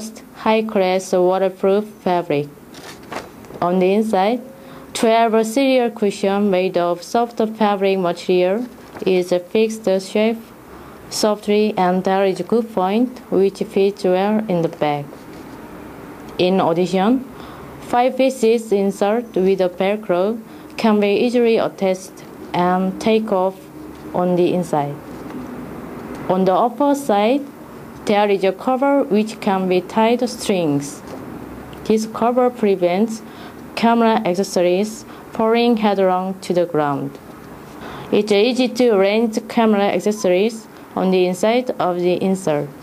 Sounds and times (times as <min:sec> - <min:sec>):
Speech: 0:00.0 - 0:02.6, 0:03.6 - 0:10.5, 0:11.1 - 0:15.1, 0:16.4 - 0:25.0, 0:26.3 - 0:31.0, 0:31.8 - 0:37.2, 0:38.1 - 0:42.8.